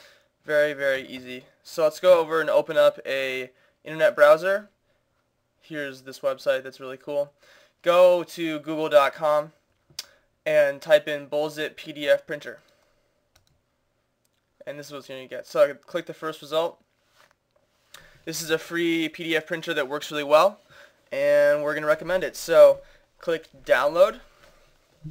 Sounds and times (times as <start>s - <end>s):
Speech: 0.5s - 4.8s, 5.6s - 9.6s, 10.5s - 12.6s, 14.6s - 16.8s, 18.3s - 24.3s.